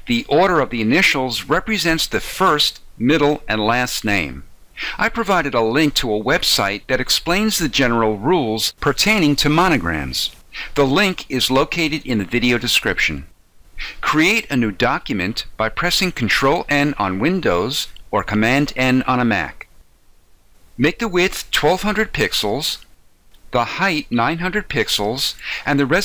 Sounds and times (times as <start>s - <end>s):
Speech: 0.0s - 19.7s, 20.8s - 22.9s, 23.5s - 26.0s.